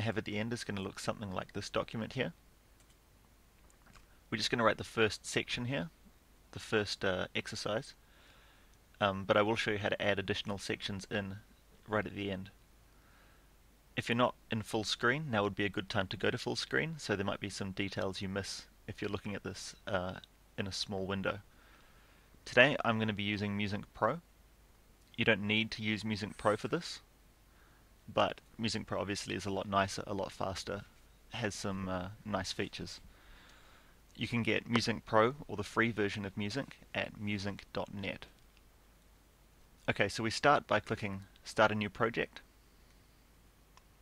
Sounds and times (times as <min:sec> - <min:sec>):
Speech: 0:00.0 - 0:02.4, 0:04.3 - 0:08.0, 0:09.0 - 0:12.6, 0:14.0 - 0:21.5, 0:22.4 - 0:24.2, 0:25.2 - 0:27.1, 0:28.1 - 0:33.1, 0:34.2 - 0:38.4, 0:39.8 - 0:42.4.